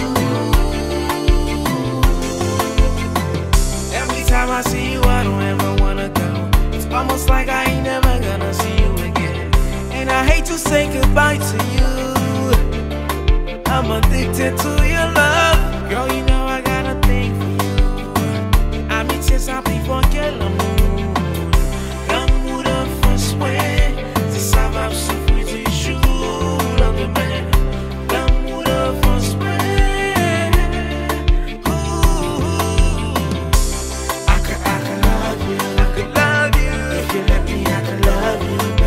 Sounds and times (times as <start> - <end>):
Music of Africa: 0.0 - 38.8.